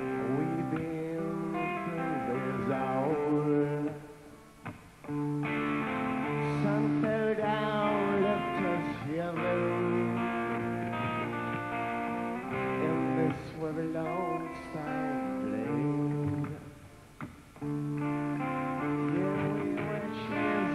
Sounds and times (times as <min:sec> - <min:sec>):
Music: 0:00.0 - 0:20.7.